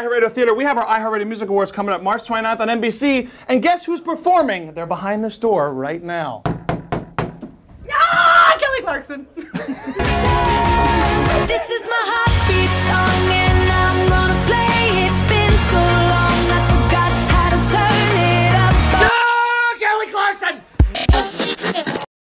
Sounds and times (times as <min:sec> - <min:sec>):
Speech: 0:00.0 - 0:06.4, 0:19.4 - 0:20.6
Music: 0:10.0 - 0:19.1, 0:20.8 - 0:21.9.